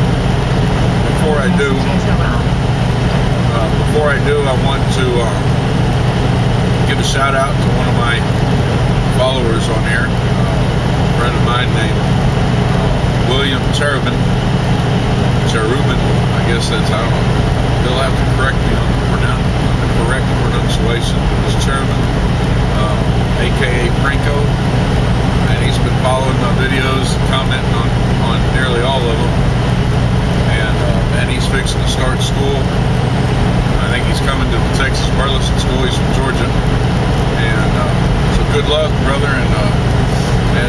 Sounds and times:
Truck: 0.0s - 40.6s
Speech: 1.0s - 2.6s, 3.4s - 5.6s, 6.8s - 8.4s, 9.1s - 12.1s, 12.9s - 14.4s, 15.4s - 24.8s, 25.4s - 29.4s, 30.4s - 32.9s, 33.6s - 36.7s, 37.4s - 40.6s.

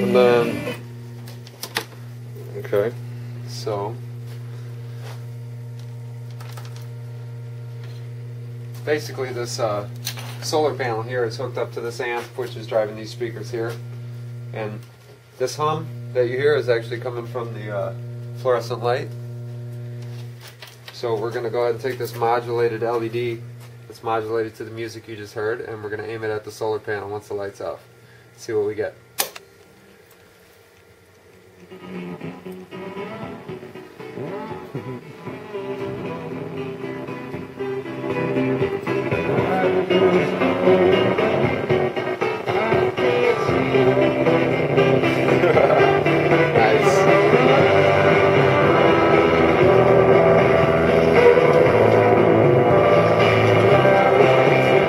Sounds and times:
Speech: 0.0s - 0.6s, 2.4s - 4.0s, 8.9s - 13.8s, 14.5s - 19.2s, 21.0s - 27.8s, 28.4s - 29.0s.

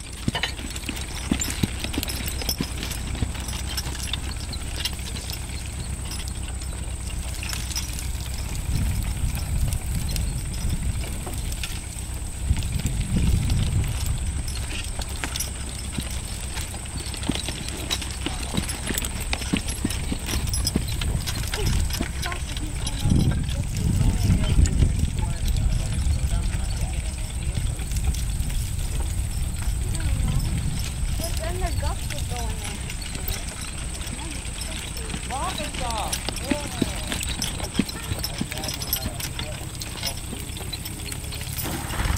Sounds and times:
Clip-clop: 0.0s - 42.1s
Speech: 21.6s - 27.8s, 34.1s - 37.2s, 37.8s - 41.5s.

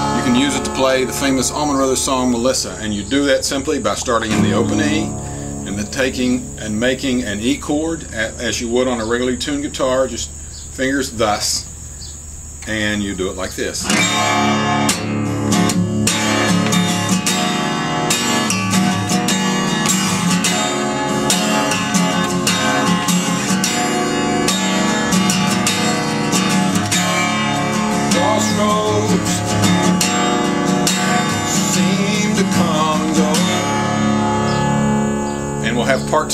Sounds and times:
Strum: 0.0s - 9.3s, 13.8s - 36.3s
Speech: 0.2s - 11.7s, 12.6s - 13.9s, 35.6s - 36.3s.

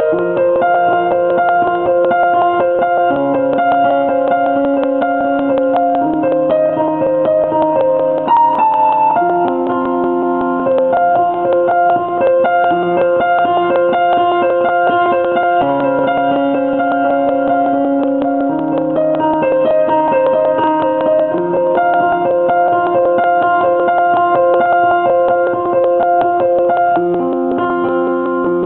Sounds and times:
Music: 0.0s - 28.6s.

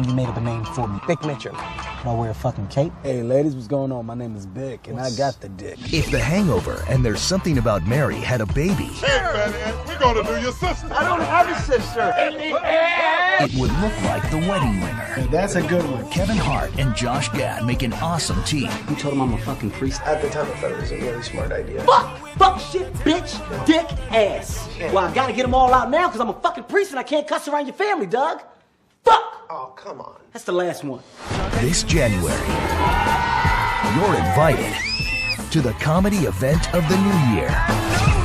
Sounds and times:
Music: 0.0s - 2.8s, 5.8s - 12.7s, 13.4s - 27.0s, 31.0s - 38.2s
Speech: 0.0s - 9.1s, 13.4s - 28.5s, 35.5s - 37.6s.

